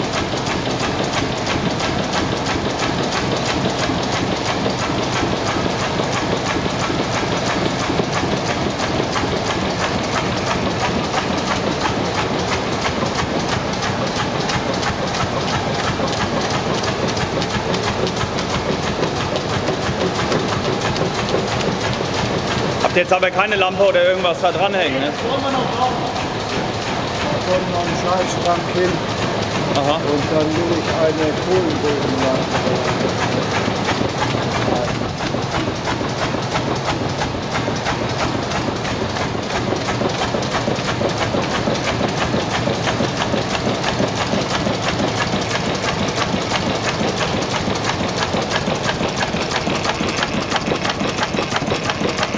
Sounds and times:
Idling: 0.0 - 52.3.

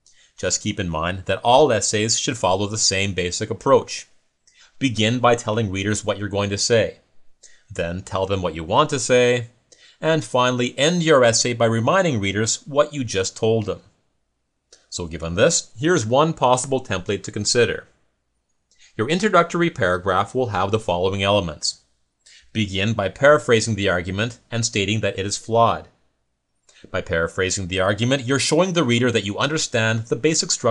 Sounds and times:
Speech: 0.4 - 4.1, 4.7 - 7.0, 7.7 - 13.9, 14.8 - 17.9, 18.9 - 26.0, 26.8 - 30.7.

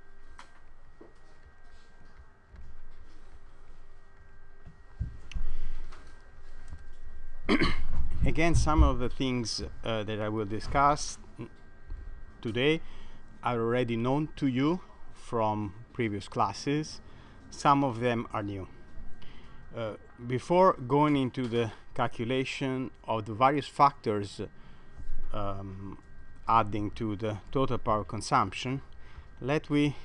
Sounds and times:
Speech: 8.2 - 11.5, 12.4 - 12.8, 13.4 - 18.7, 19.7 - 24.5, 25.4 - 30.0.

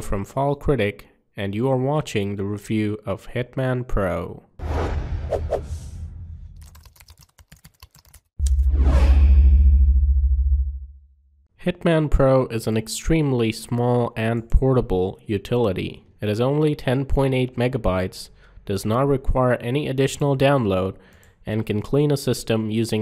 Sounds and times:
Sound effect: 4.6 - 6.9, 8.4 - 11.4.

